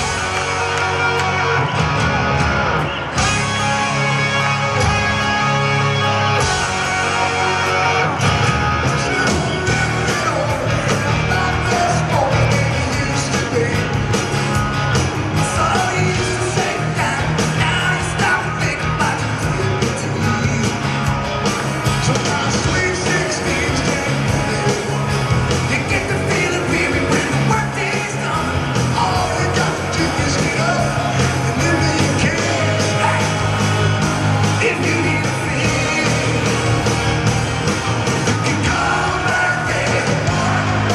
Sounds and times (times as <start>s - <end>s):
Rock and roll: 0.0s - 40.9s.